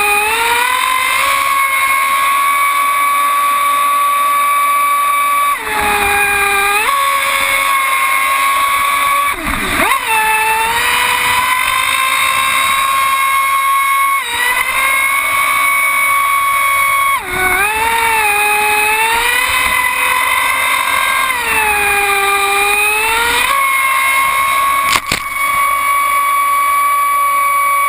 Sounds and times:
Motorboat, speedboat: 0.0 - 27.8.

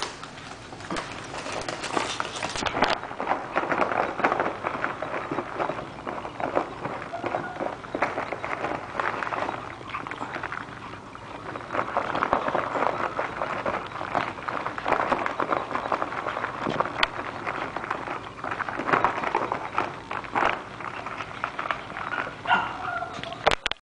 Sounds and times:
Yip: 22.4 - 23.6.

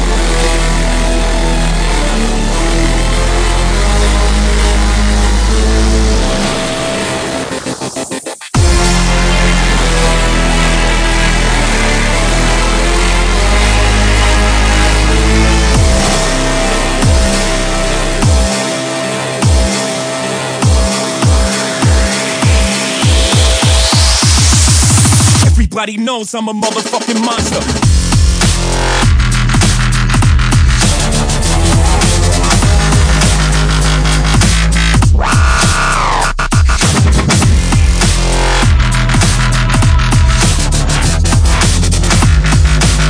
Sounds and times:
Dubstep: 0.0 - 43.1.

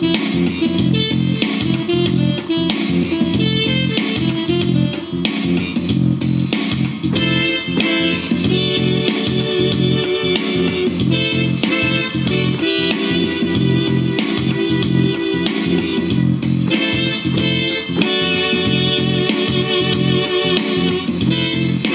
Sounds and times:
Electric piano: 0.0 - 21.9.

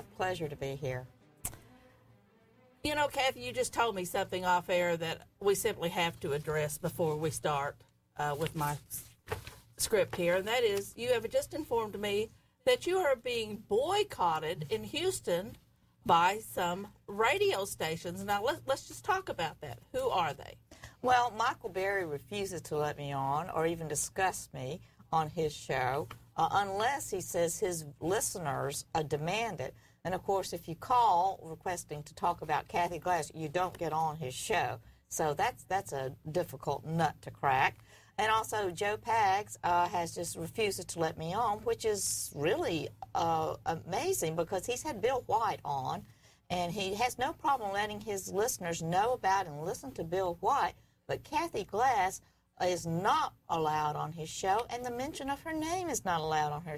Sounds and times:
Speech: 0.0 - 1.1, 2.9 - 9.1, 9.8 - 56.7.

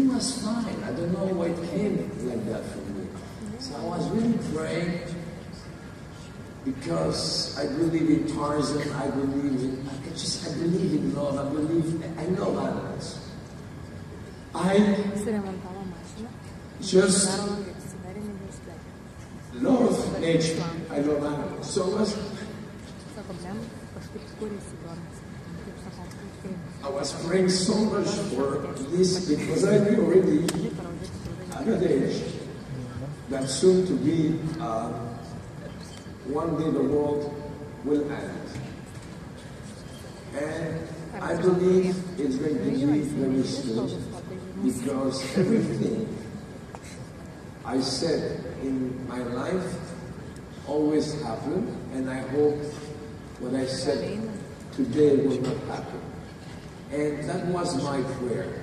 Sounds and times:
Speech: 19.6 - 22.5, 23.1 - 35.4, 40.4 - 46.2, 50.7 - 56.2, 56.9 - 58.6.

